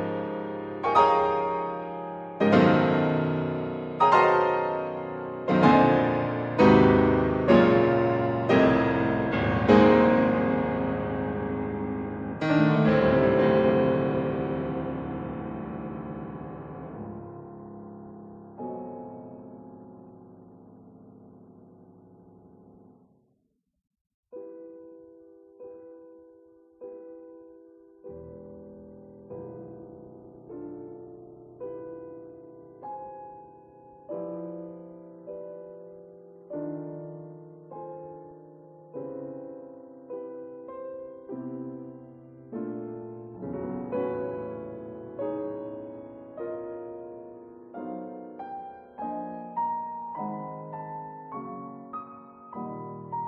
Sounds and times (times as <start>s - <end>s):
Classical music: 0.0s - 23.0s, 24.4s - 53.2s
Piano: 0.0s - 23.6s, 24.3s - 53.2s.